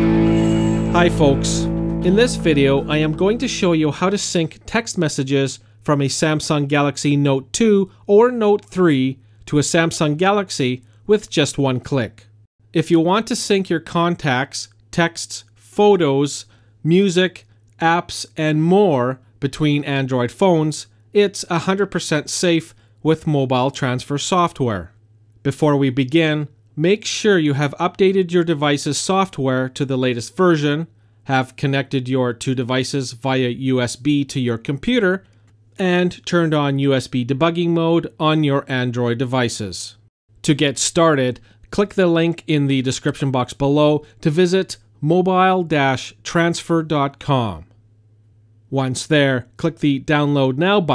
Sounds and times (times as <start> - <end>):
Speech: 0.8 - 47.7, 48.7 - 50.9.